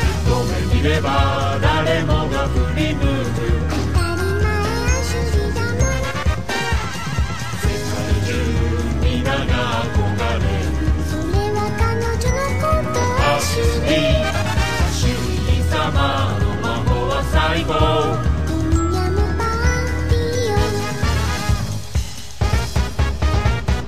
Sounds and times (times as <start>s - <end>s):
Music: 0.0s - 23.8s.